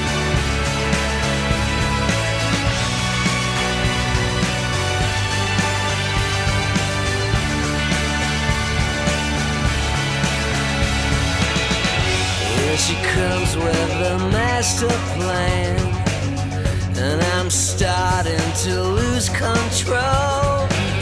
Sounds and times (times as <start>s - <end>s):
Music: 0.0s - 21.0s.